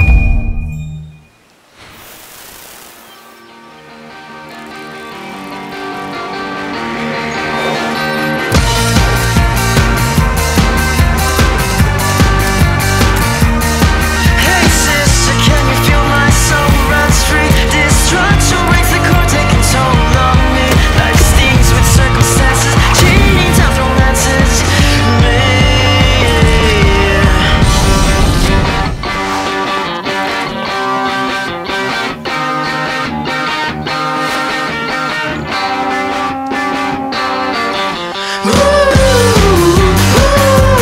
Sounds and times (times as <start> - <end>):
Electric guitar: 3.8 - 40.8.